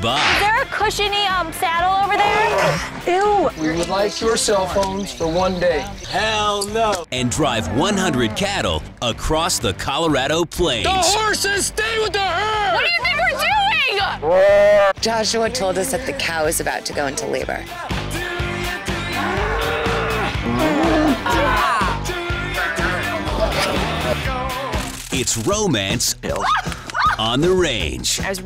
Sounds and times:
Moo: 7.4 - 8.4, 19.1 - 21.2.

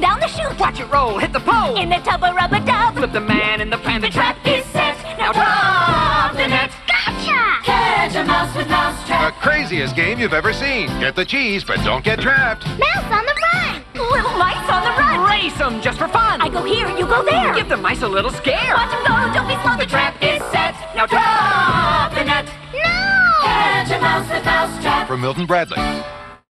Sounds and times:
Music: 0.0 - 26.5
Speech: 25.1 - 25.8.

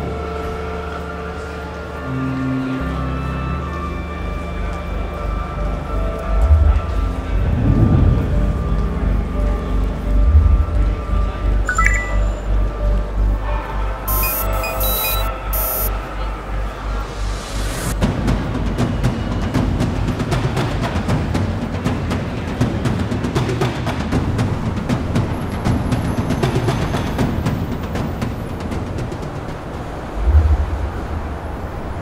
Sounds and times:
Music: 0.0 - 15.9, 16.8 - 29.3.

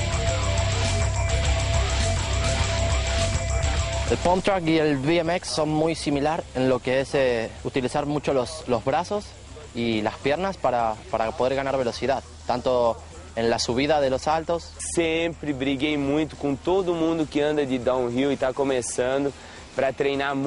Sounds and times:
Speech: 4.1 - 20.4.

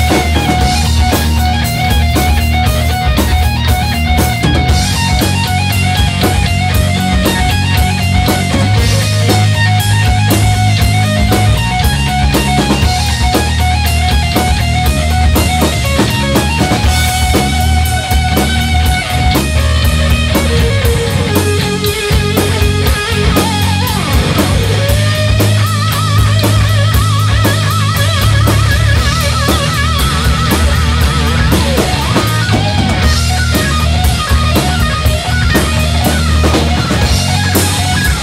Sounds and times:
Bass guitar: 0.0 - 38.2
Electric guitar: 0.0 - 38.2
Rock and roll: 0.0 - 38.2.

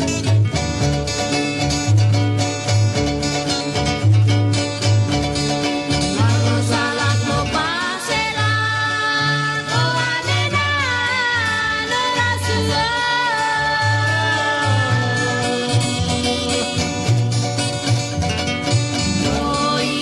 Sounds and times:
Traditional music: 0.0 - 20.0.

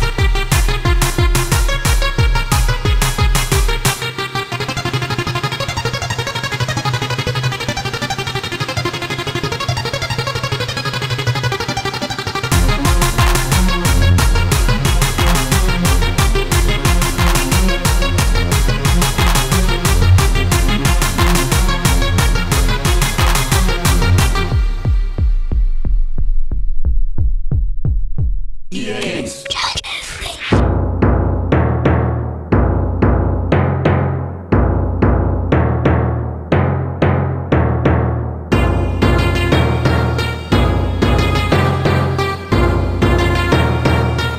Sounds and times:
Techno: 0.0 - 25.2, 28.8 - 30.7.

